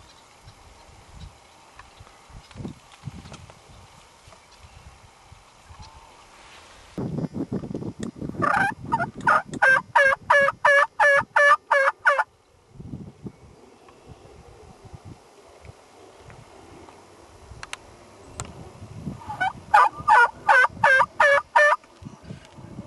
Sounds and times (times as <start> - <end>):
Gobble: 8.4 - 12.3, 19.2 - 21.8.